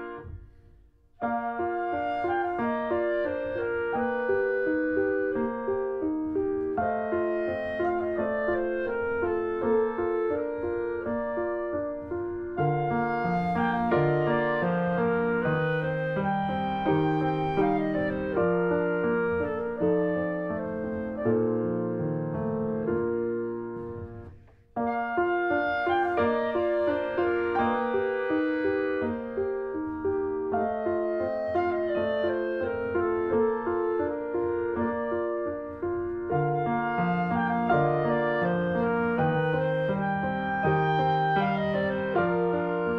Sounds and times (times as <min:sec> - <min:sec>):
Music: 0:00.0 - 0:42.9.